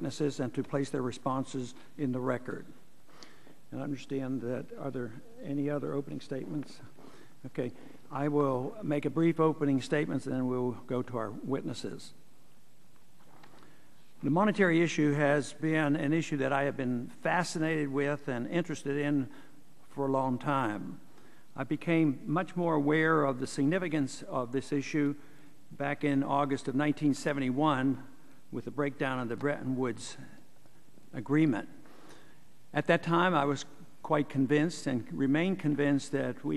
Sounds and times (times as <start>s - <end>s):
Speech: 0.0s - 2.8s, 3.7s - 12.2s, 14.2s - 19.3s, 19.9s - 21.0s, 21.6s - 25.2s, 25.8s - 30.4s, 31.1s - 31.8s, 32.7s - 36.5s.